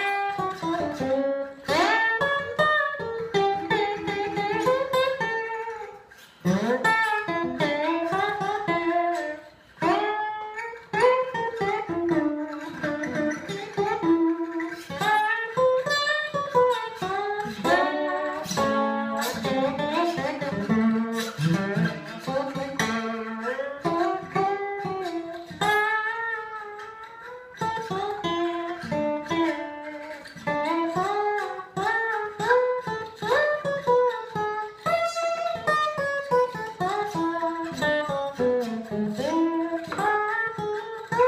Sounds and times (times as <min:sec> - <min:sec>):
Strum: 0:00.0 - 0:41.2.